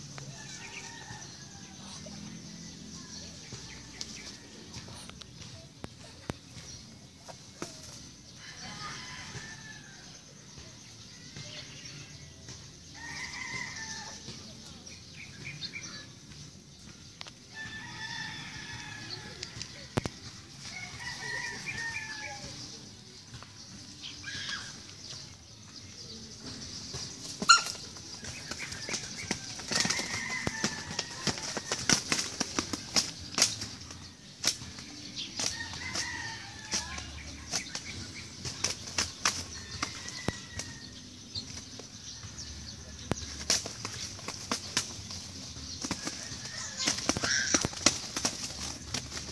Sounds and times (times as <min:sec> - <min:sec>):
Bird: 0:00.0 - 0:49.3.